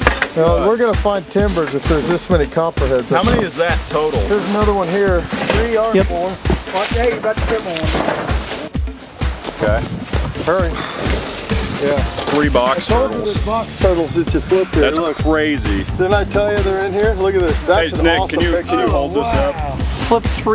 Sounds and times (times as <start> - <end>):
Music: 0.0 - 20.5
Outside, rural or natural: 0.0 - 20.5
Speech: 0.4 - 8.0, 11.8 - 20.5.